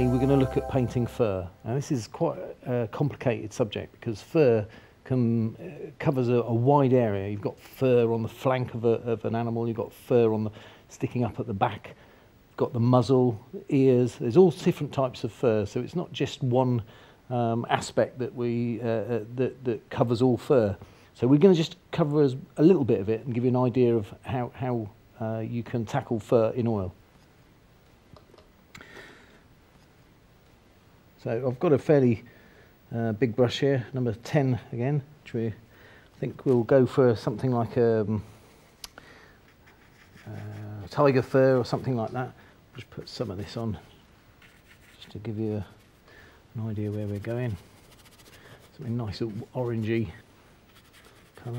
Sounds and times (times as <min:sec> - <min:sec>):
Speech: 0:00.0 - 0:12.0, 0:12.6 - 0:27.0, 0:31.2 - 0:32.3, 0:32.9 - 0:35.6, 0:36.2 - 0:38.3, 0:40.2 - 0:44.0, 0:44.9 - 0:45.8, 0:46.6 - 0:47.7, 0:48.7 - 0:50.2, 0:51.4 - 0:51.5.